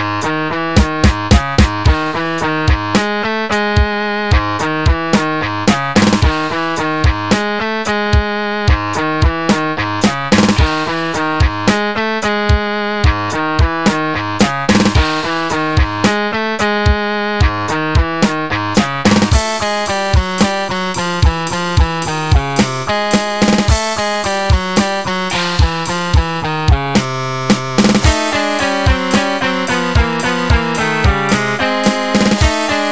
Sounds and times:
Rhythm and blues: 0.0s - 32.9s.

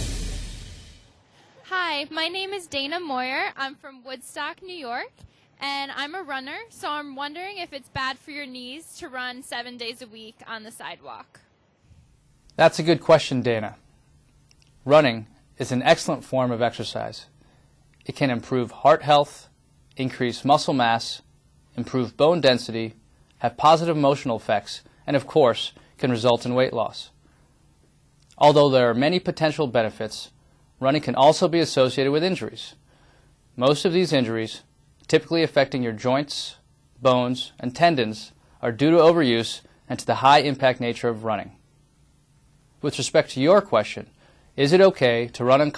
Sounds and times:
Inside, small room: 0.0s - 45.7s
Speech: 1.6s - 11.4s, 12.6s - 13.8s, 14.8s - 17.3s, 18.0s - 27.2s, 28.3s - 32.8s, 33.6s - 41.6s, 42.8s - 45.7s.

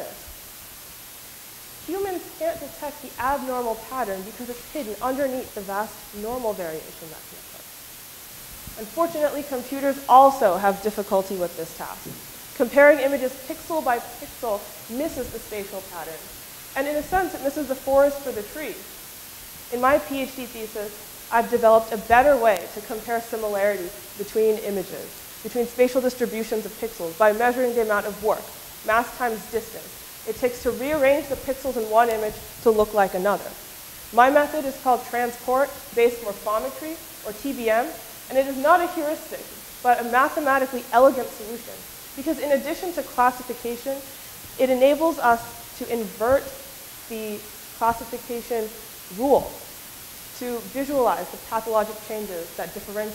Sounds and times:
Speech: 1.8s - 7.6s, 8.8s - 18.9s, 19.7s - 49.7s, 50.4s - 53.1s.

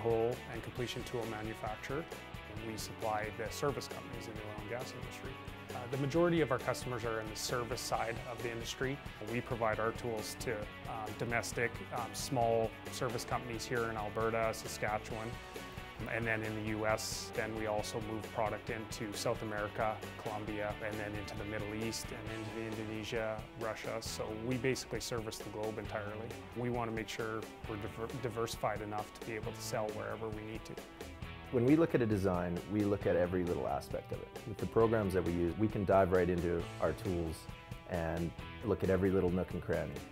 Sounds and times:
Speech: 0.0s - 15.4s, 16.0s - 30.8s, 31.5s - 40.1s
Music: 0.0s - 40.1s.

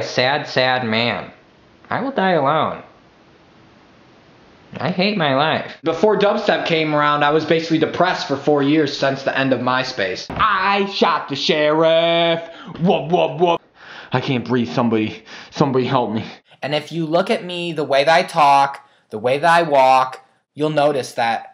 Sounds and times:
Speech: 0.0s - 3.0s, 4.7s - 21.5s.

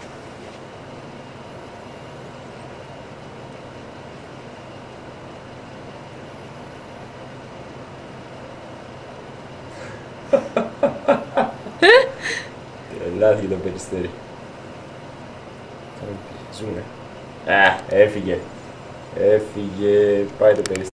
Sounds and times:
Speech: 12.9s - 14.2s, 16.0s - 16.9s, 17.5s - 18.5s, 19.1s - 20.9s.

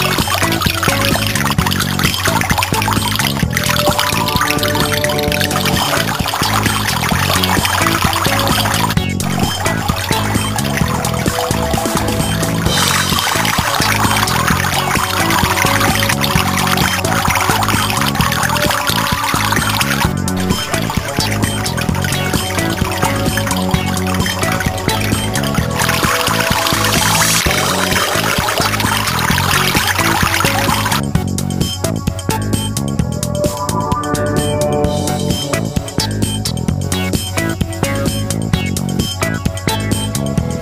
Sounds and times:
Gurgling: 0.0s - 31.1s
Music: 0.0s - 40.6s.

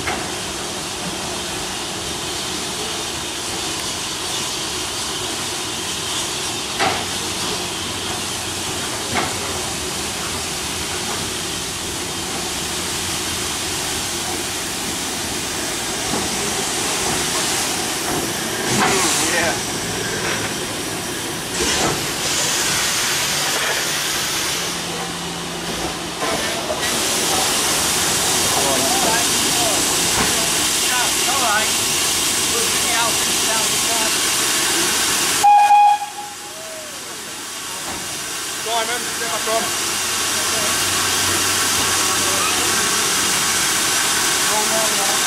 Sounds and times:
Railroad car, train wagon: 0.0s - 45.2s
Train: 0.0s - 45.2s.

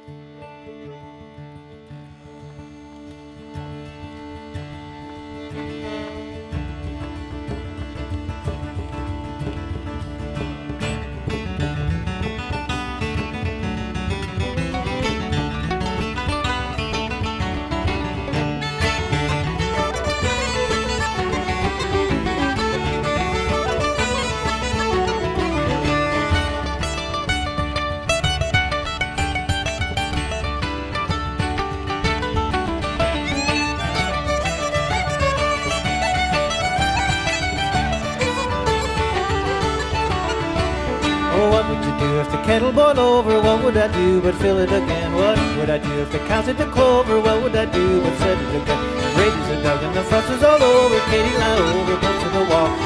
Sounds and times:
Music: 0.0s - 52.8s.

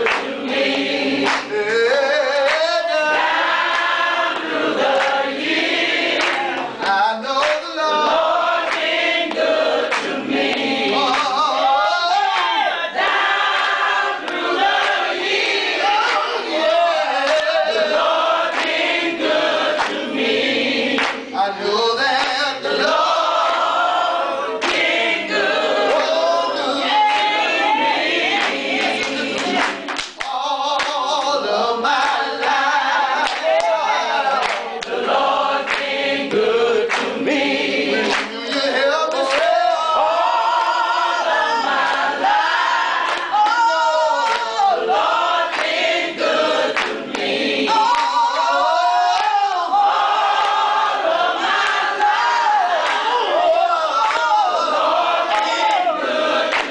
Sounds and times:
A capella: 0.0s - 56.7s
Singing: 0.0s - 56.7s.

